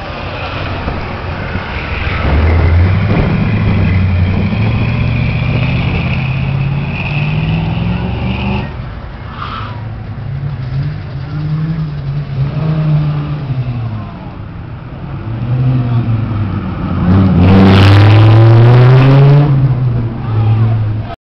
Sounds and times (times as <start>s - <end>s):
Speech: 20.2s - 21.2s.